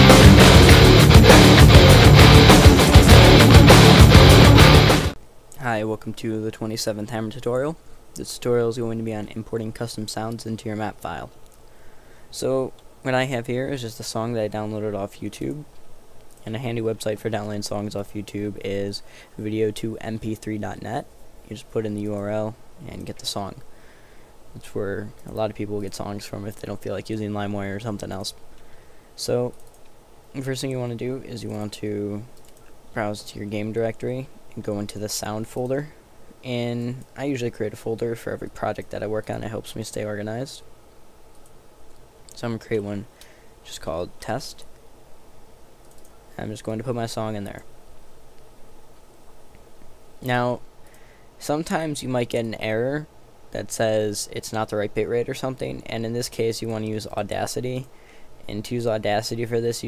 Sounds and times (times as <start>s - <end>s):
Speech: 5.6s - 11.4s, 12.3s - 15.7s, 16.4s - 23.6s, 24.6s - 28.4s, 29.2s - 29.6s, 30.4s - 32.3s, 33.0s - 40.7s, 42.3s - 44.7s, 46.3s - 47.7s, 50.2s - 50.6s, 51.4s - 57.9s, 58.5s - 59.8s.